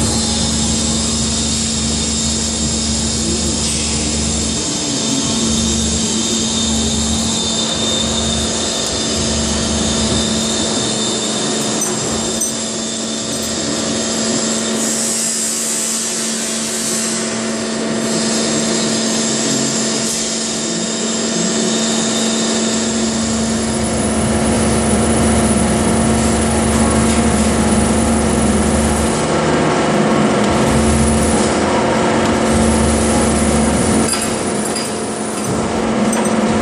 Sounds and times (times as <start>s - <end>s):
Drill: 0.0s - 29.3s.